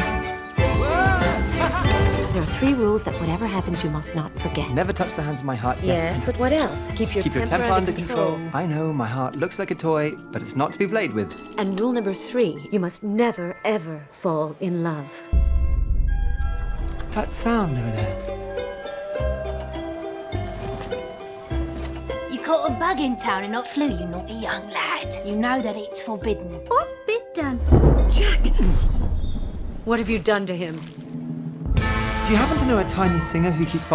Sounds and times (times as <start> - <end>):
Music: 0.0 - 33.9.